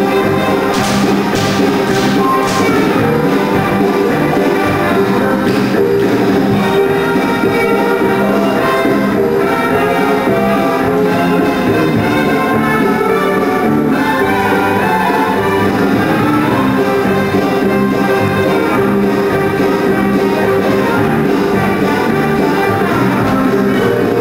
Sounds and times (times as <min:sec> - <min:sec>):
Music: 0:00.0 - 0:24.2.